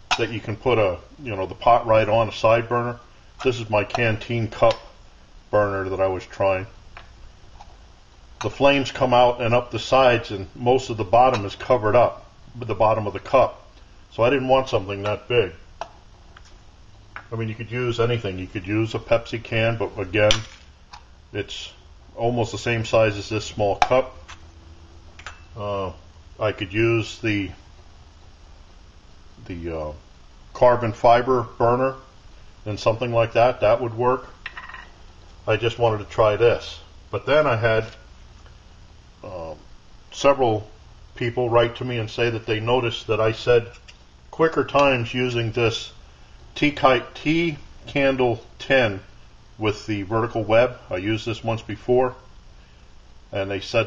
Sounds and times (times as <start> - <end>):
Speech: 0.1 - 6.8, 8.4 - 15.6, 17.3 - 20.5, 21.4 - 24.2, 25.6 - 27.6, 29.4 - 30.0, 30.6 - 34.3, 35.5 - 38.0, 39.2 - 46.0, 46.6 - 52.2, 53.3 - 53.8.